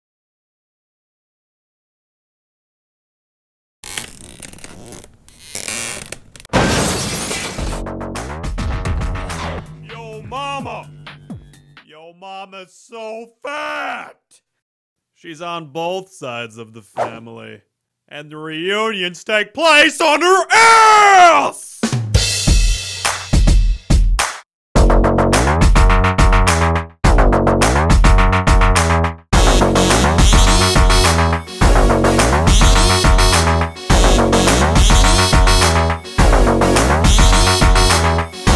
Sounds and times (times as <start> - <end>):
Music: 7.6 - 11.9, 21.8 - 38.5.